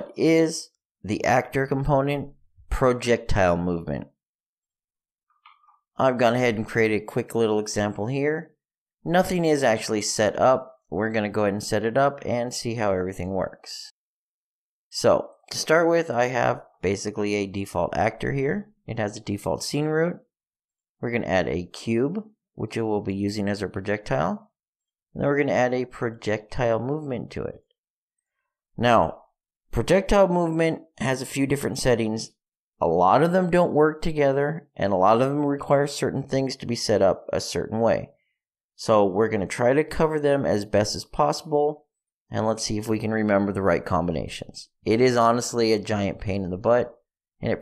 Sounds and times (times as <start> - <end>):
Speech: 0.0 - 4.1, 6.0 - 14.0, 14.9 - 20.2, 21.0 - 24.5, 25.2 - 27.7, 28.8 - 38.1, 38.8 - 47.6.